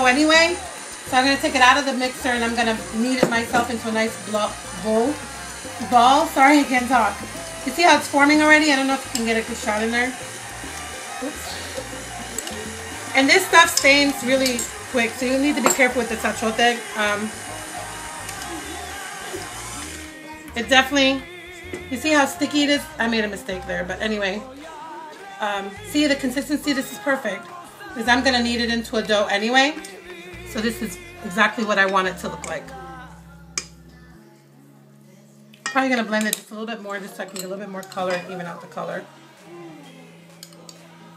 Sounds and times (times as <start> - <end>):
Music: 0.0 - 41.1.